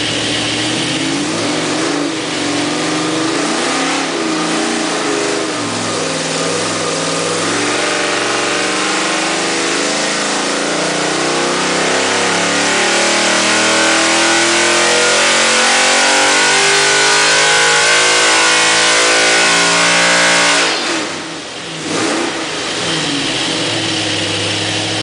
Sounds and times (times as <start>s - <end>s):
Idling: 0.0s - 1.2s, 22.5s - 25.0s.